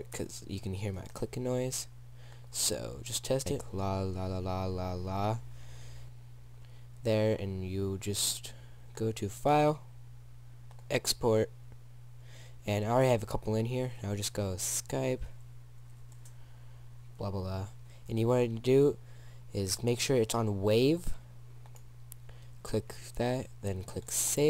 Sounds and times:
Speech: 0.0s - 1.9s, 2.5s - 5.4s, 7.0s - 9.9s, 10.9s - 11.5s, 12.6s - 15.4s, 17.2s - 21.2s, 22.6s - 24.4s.

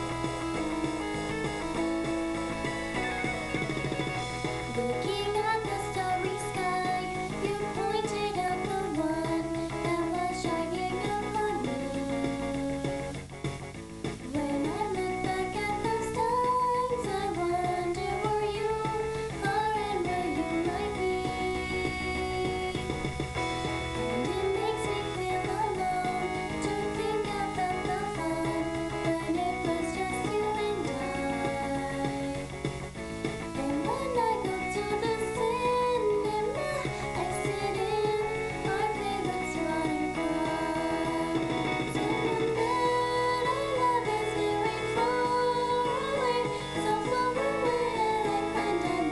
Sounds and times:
Music: 0.0s - 49.1s.

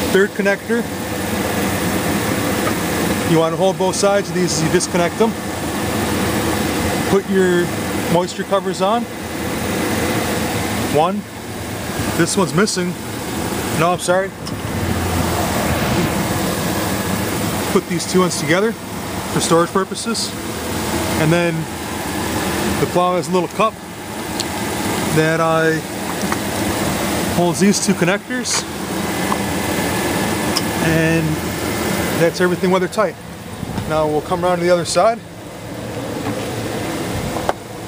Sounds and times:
Speech: 0.0s - 0.9s, 3.2s - 5.4s, 7.0s - 9.1s, 10.9s - 11.3s, 12.2s - 13.0s, 13.8s - 14.4s, 17.7s - 18.8s, 19.4s - 20.4s, 21.2s - 21.7s, 22.8s - 23.8s, 25.1s - 25.9s, 27.4s - 28.7s, 30.8s - 31.4s, 32.2s - 33.2s, 33.8s - 35.3s
Vehicle: 0.0s - 37.8s.

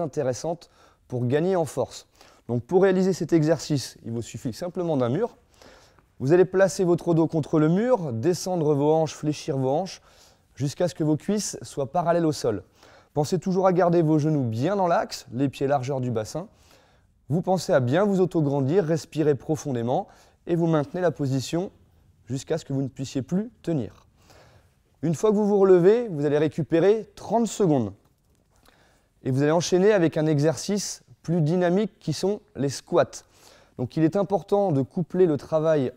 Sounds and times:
Speech: 0.0s - 5.4s, 6.2s - 10.0s, 10.6s - 16.6s, 17.3s - 24.1s, 25.0s - 28.0s, 29.2s - 35.9s
Inside, small room: 0.0s - 35.9s.

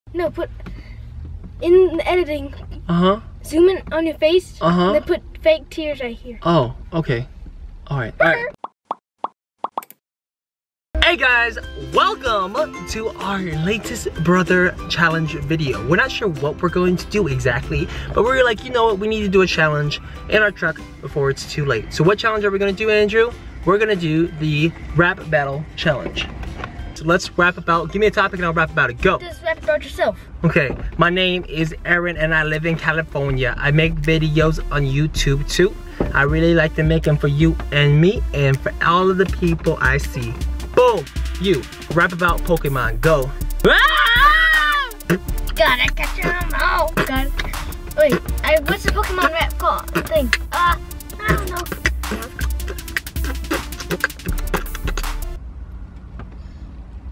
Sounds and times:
Speech: 7.9s - 8.6s.

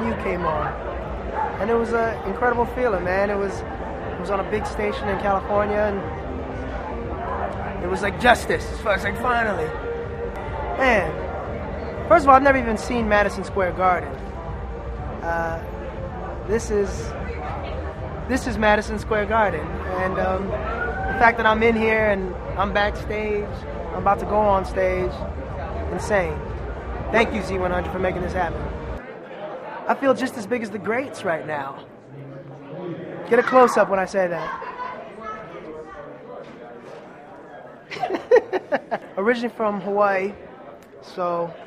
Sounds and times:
Music: 0.0s - 29.0s.

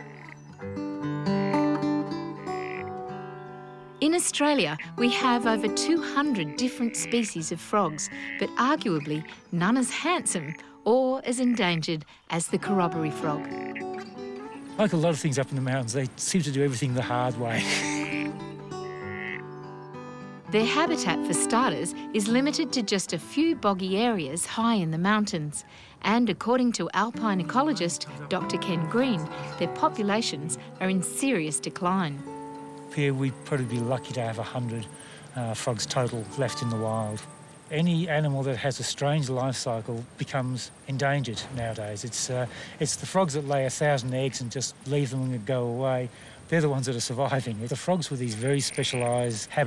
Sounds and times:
Music: 0.0s - 40.0s
Speech: 20.5s - 32.2s, 33.0s - 49.6s.

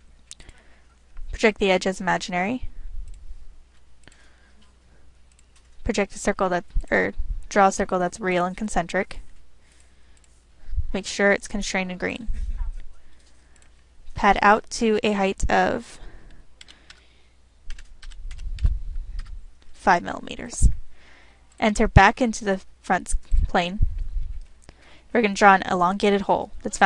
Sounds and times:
Speech: 1.4s - 2.7s, 5.9s - 9.2s, 11.0s - 12.8s, 14.2s - 16.0s, 19.8s - 20.7s, 21.6s - 23.8s, 25.2s - 26.8s.

